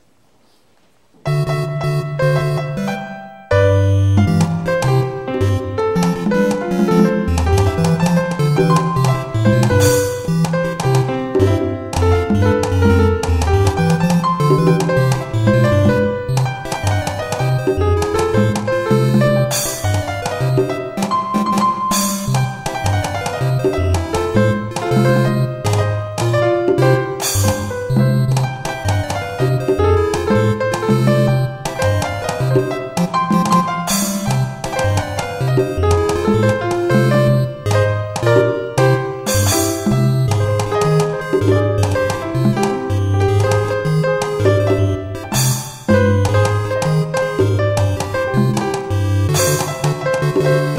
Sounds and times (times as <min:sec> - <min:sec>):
Video game music: 0:01.2 - 0:50.7.